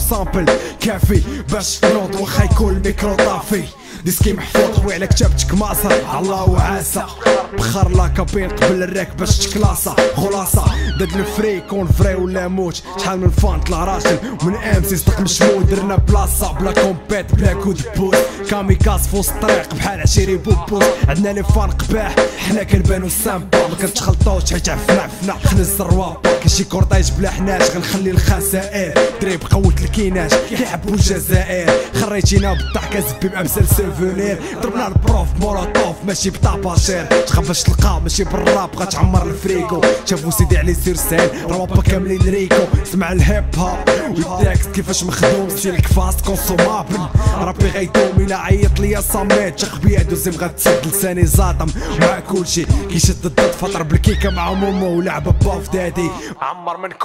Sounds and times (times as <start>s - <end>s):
Hip hop music: 0.0s - 57.0s
Rapping: 0.0s - 57.0s.